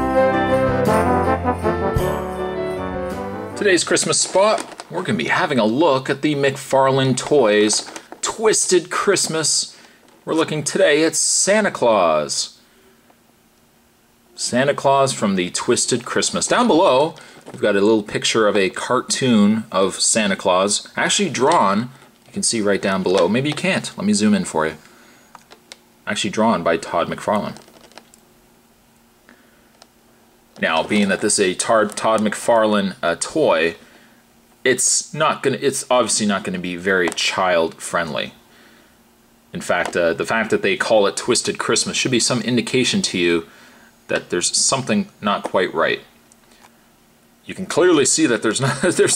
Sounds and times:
Inside, small room: 0:00.0 - 0:49.1
Speech: 0:03.6 - 0:12.6, 0:14.4 - 0:24.8, 0:26.1 - 0:27.7, 0:30.6 - 0:33.8, 0:34.6 - 0:38.4, 0:39.5 - 0:43.5, 0:44.1 - 0:46.2, 0:47.5 - 0:49.1.

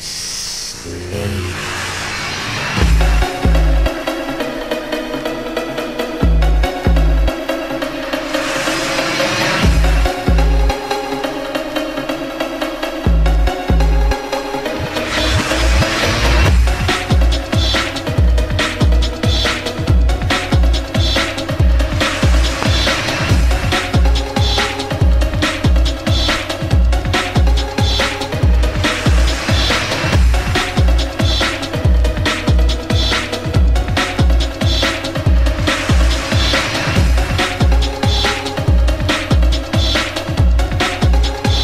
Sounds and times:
Electronica: 0:00.0 - 0:41.6.

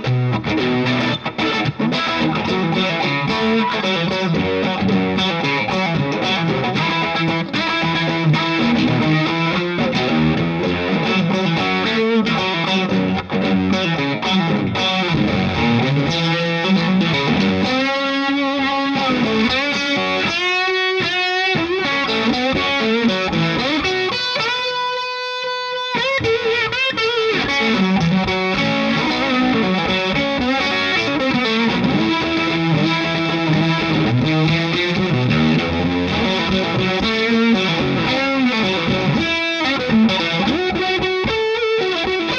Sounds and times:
Music: 0:00.0 - 0:42.3.

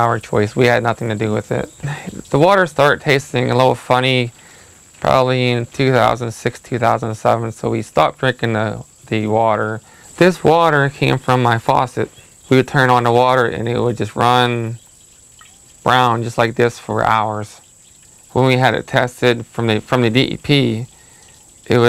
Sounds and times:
Speech: 0:00.0 - 0:04.4, 0:05.0 - 0:14.8, 0:15.9 - 0:17.6, 0:18.3 - 0:20.9, 0:21.7 - 0:21.8.

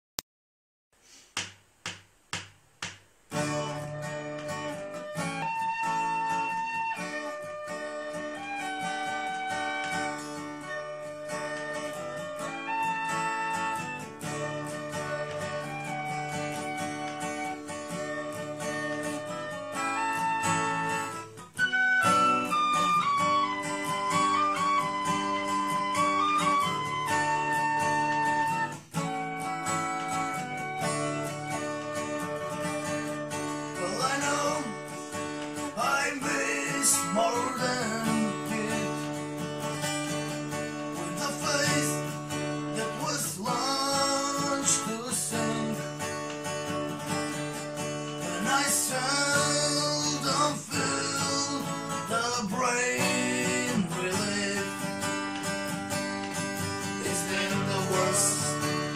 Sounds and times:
Guitar: 0:02.3 - 0:58.9.

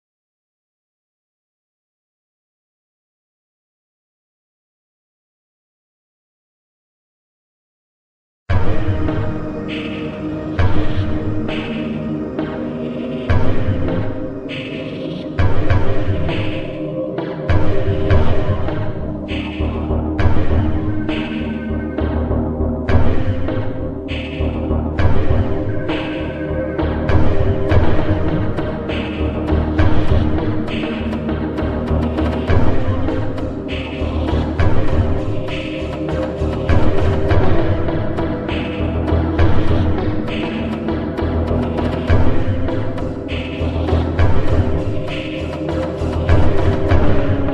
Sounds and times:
Background music: 0:08.5 - 0:47.5
Scary music: 0:08.5 - 0:47.5.

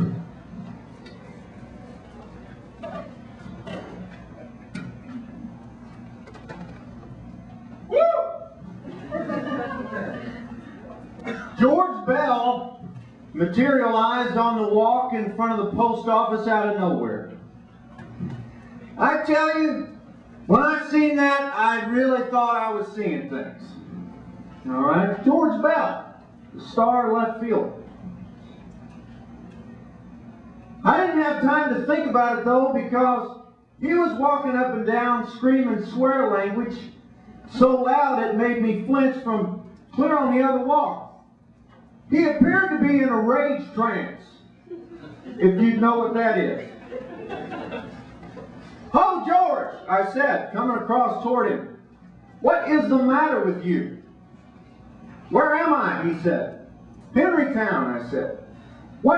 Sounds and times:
Speech: 0:11.6 - 0:12.8, 0:13.4 - 0:17.4, 0:19.0 - 0:23.8, 0:24.6 - 0:27.8, 0:30.8 - 0:41.2, 0:42.1 - 0:44.5, 0:45.4 - 0:46.7, 0:48.9 - 0:51.8, 0:52.4 - 0:54.0, 0:55.3 - 0:56.6, 0:57.2 - 0:58.4.

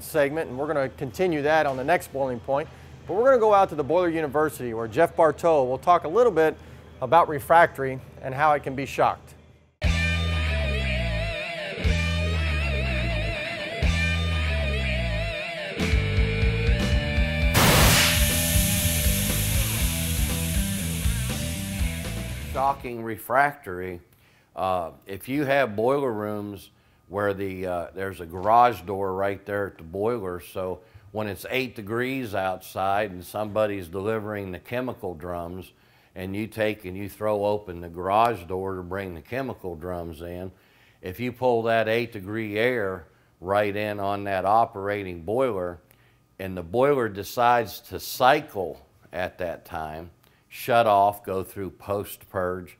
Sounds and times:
Speech: 0:00.0 - 0:09.4, 0:22.6 - 0:45.8, 0:46.4 - 0:52.7.

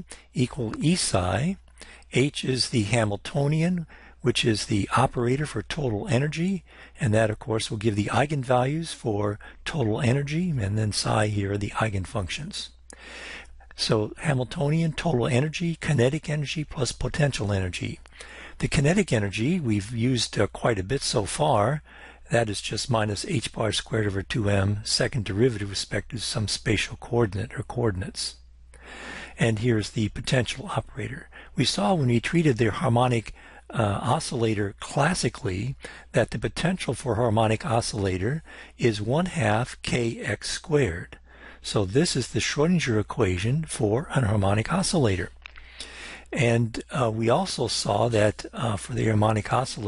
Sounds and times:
Speech: 0:00.0 - 0:12.8, 0:13.8 - 0:28.4, 0:29.4 - 0:45.4, 0:46.3 - 0:49.8.

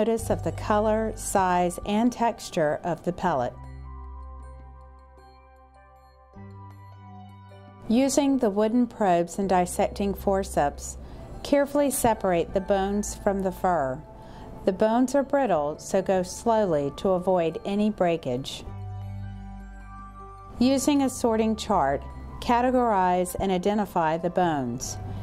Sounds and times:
Speech: 0:00.0 - 0:03.6, 0:07.9 - 0:14.0, 0:14.7 - 0:18.6, 0:20.6 - 0:25.0
Music: 0:00.0 - 0:25.2.

